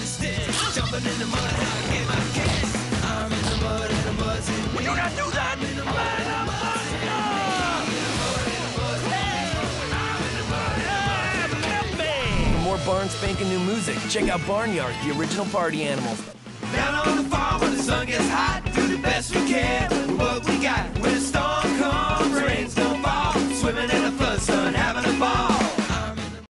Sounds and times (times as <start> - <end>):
Music: 0.0 - 26.5.